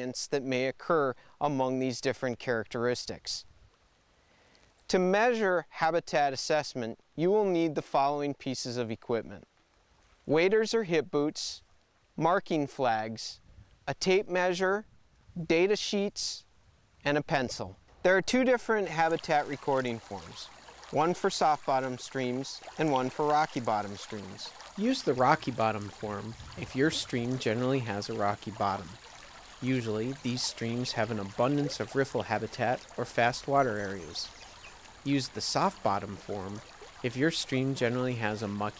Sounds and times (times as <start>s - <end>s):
Stream: 0.0s - 13.4s, 14.0s - 38.7s.